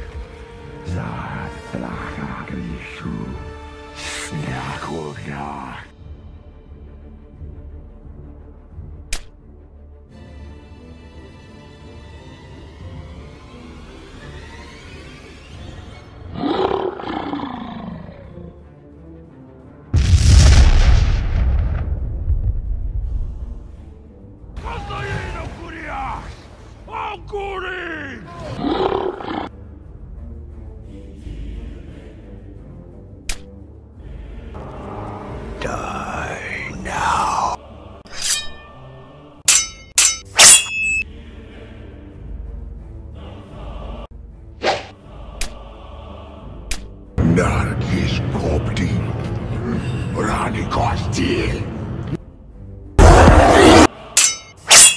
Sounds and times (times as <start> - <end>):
Music: 0.0 - 54.9.